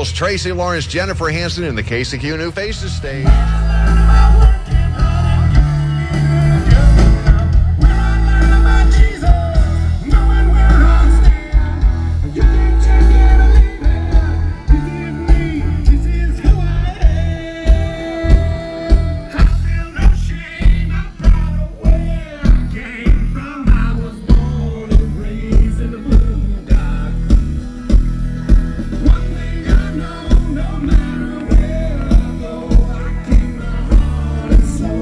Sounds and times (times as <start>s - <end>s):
Country: 0.0s - 35.0s.